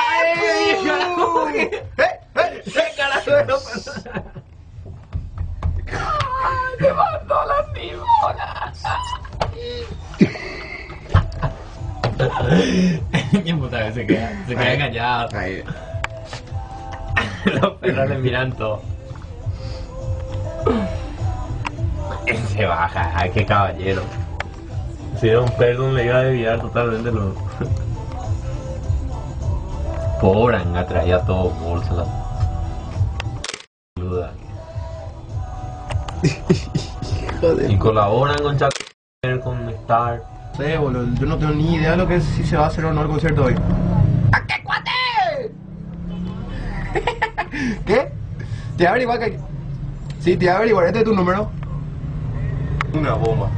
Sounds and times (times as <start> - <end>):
Music: 0.0 - 53.5.